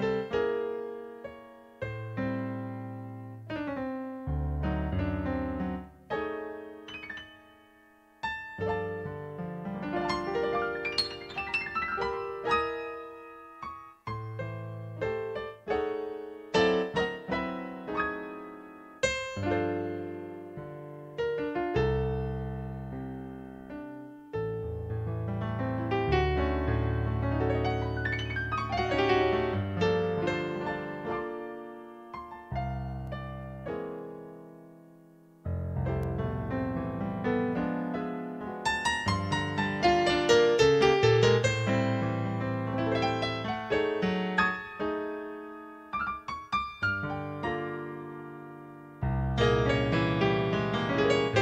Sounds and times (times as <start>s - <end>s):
Jazz: 0.0s - 51.4s.